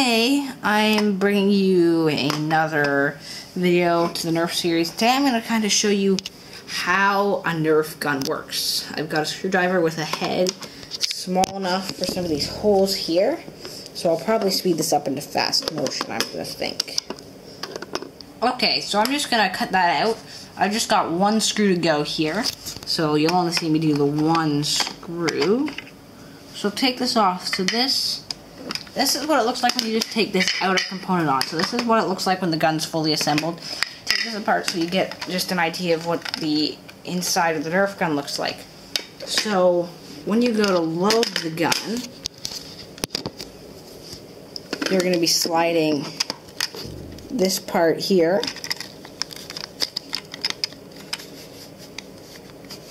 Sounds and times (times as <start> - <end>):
Speech: 0.0 - 17.1, 18.4 - 25.8, 26.6 - 42.1, 44.8 - 46.2, 46.9 - 48.6.